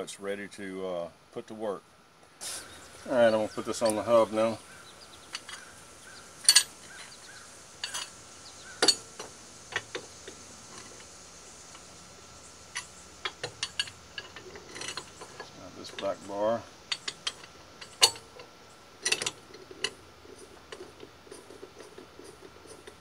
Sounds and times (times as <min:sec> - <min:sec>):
Speech: 0:00.0 - 0:01.8, 0:03.0 - 0:04.6, 0:15.5 - 0:16.7.